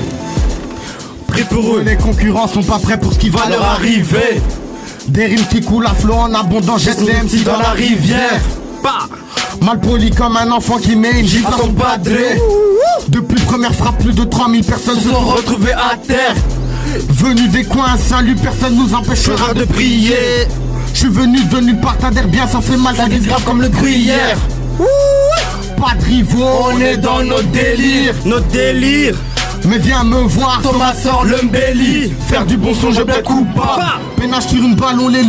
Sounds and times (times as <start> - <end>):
Music: 0.0 - 35.2.